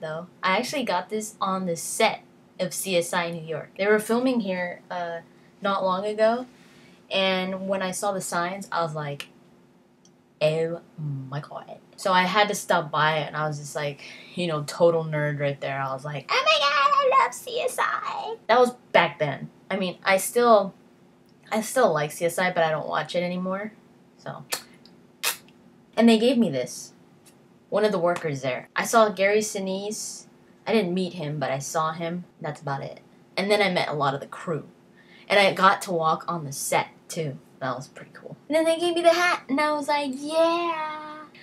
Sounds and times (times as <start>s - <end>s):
Speech: 0.0s - 6.5s, 7.1s - 9.3s, 10.4s - 20.8s, 21.5s - 24.6s, 26.0s - 27.0s, 27.7s - 34.7s, 35.3s - 41.4s.